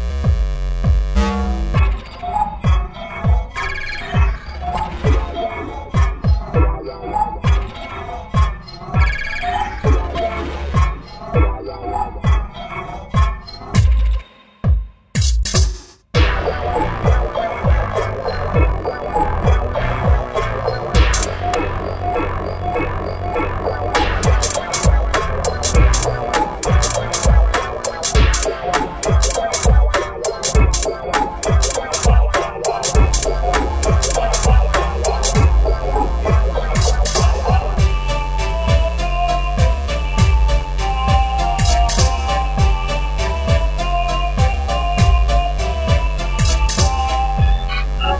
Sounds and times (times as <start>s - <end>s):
Soundtrack music: 0.0s - 15.0s, 16.2s - 48.2s.